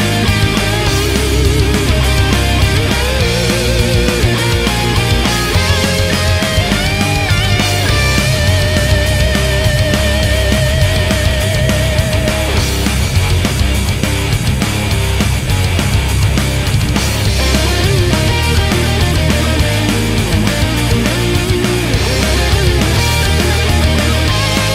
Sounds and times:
Exciting music: 0:00.0 - 0:24.7
Grunge: 0:00.0 - 0:24.7
Heavy metal: 0:00.0 - 0:24.7
Progressive rock: 0:00.0 - 0:24.7
Rock and roll: 0:00.0 - 0:24.7.

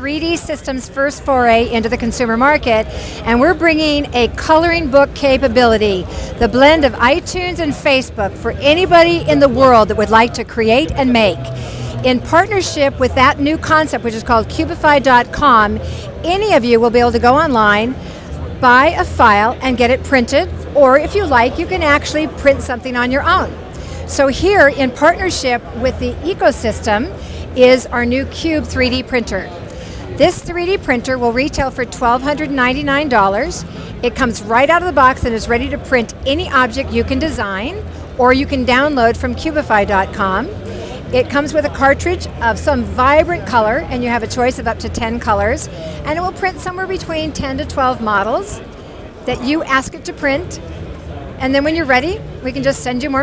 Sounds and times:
Speech: 0:00.0 - 0:50.7, 0:51.4 - 0:53.2.

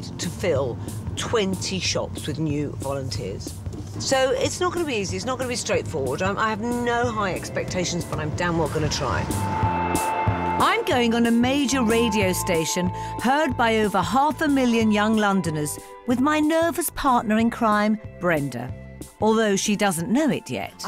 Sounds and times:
Speech: 0:00.0 - 0:09.2, 0:10.6 - 0:20.8
Music: 0:00.0 - 0:20.8.

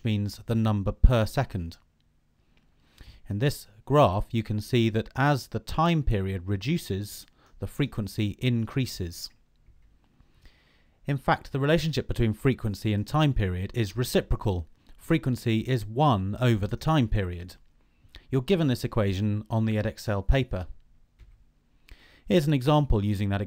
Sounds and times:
Speech: 0:00.0 - 0:01.9, 0:03.2 - 0:09.4, 0:11.0 - 0:17.6, 0:18.3 - 0:20.8, 0:22.3 - 0:23.4.

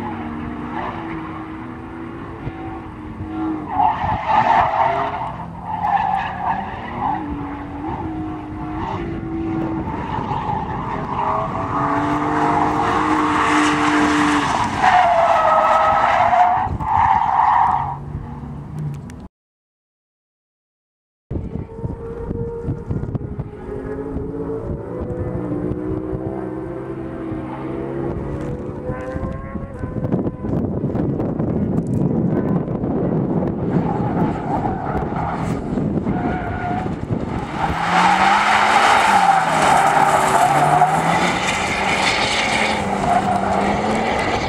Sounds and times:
Race car, auto racing: 0:00.0 - 0:19.3, 0:21.3 - 0:44.4.

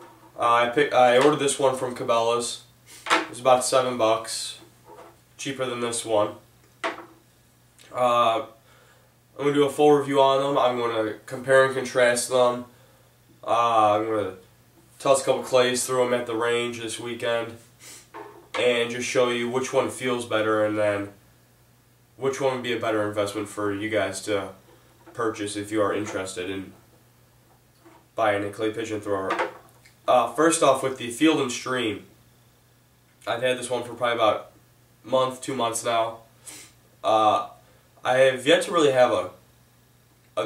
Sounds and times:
Speech: 0:00.4 - 0:02.7, 0:03.3 - 0:04.7, 0:05.4 - 0:06.4, 0:07.8 - 0:08.6, 0:09.4 - 0:12.7, 0:13.4 - 0:14.4, 0:15.0 - 0:17.6, 0:18.6 - 0:21.2, 0:22.2 - 0:24.6, 0:25.2 - 0:26.8, 0:28.2 - 0:29.5, 0:30.1 - 0:32.1, 0:33.2 - 0:36.3, 0:37.0 - 0:39.4.

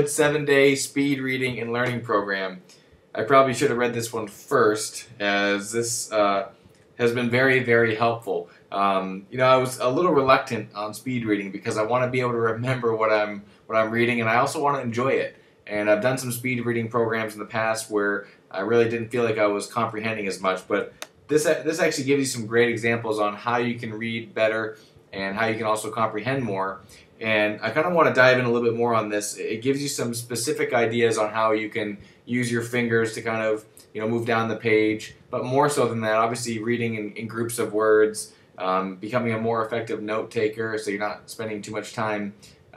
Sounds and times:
Speech: 0:00.0 - 0:02.6, 0:03.2 - 0:42.7.

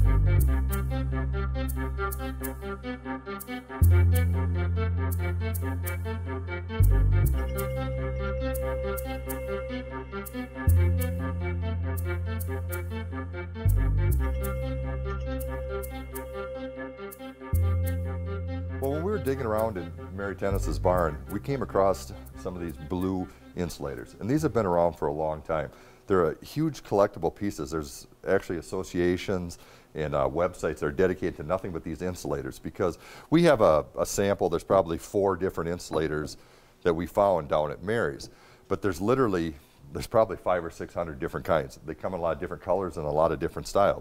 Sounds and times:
Music: 0:00.0 - 0:25.1
Speech: 0:18.8 - 0:44.0.

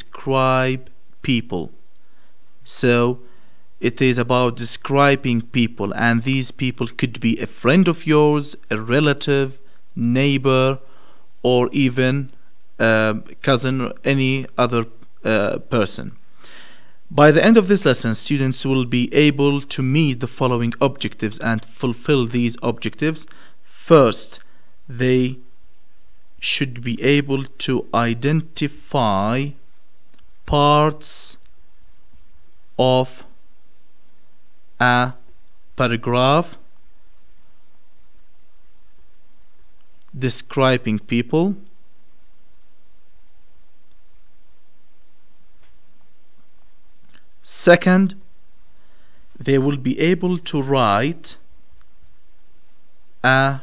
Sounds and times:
Speech: 0:00.0 - 0:01.8, 0:02.7 - 0:03.2, 0:03.8 - 0:10.8, 0:11.4 - 0:16.2, 0:17.1 - 0:25.4, 0:26.4 - 0:29.6, 0:30.5 - 0:31.4, 0:32.8 - 0:33.4, 0:34.8 - 0:35.2, 0:35.8 - 0:36.7, 0:40.2 - 0:41.7, 0:47.4 - 0:48.2, 0:49.4 - 0:51.5, 0:53.2 - 0:53.6.

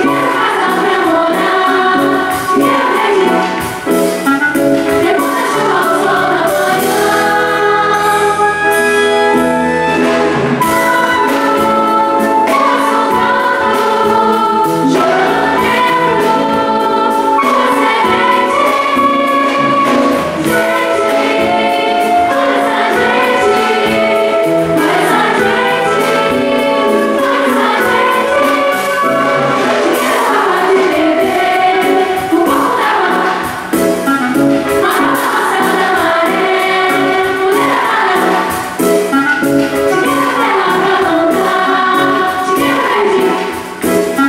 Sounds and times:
Choir: 0:00.0 - 0:10.0, 0:10.6 - 0:44.2
Orchestra: 0:00.0 - 0:44.2.

